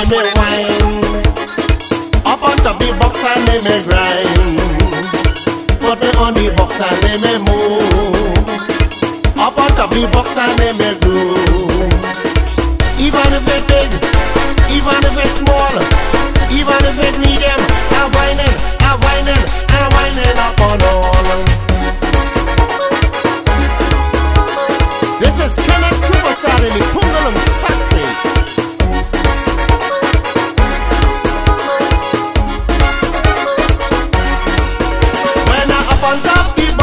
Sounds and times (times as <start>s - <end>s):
Music: 0.0s - 36.8s.